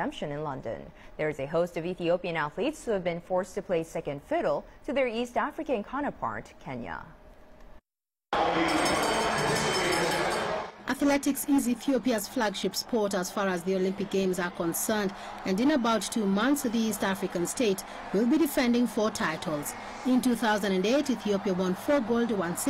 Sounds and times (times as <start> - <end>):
Speech: 0.0 - 7.2, 8.4 - 22.7.